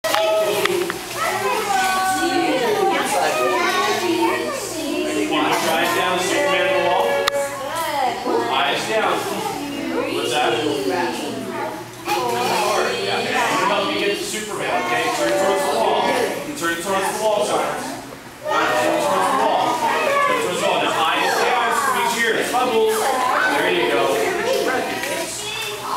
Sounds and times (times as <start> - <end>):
Speech: 0.0 - 25.9.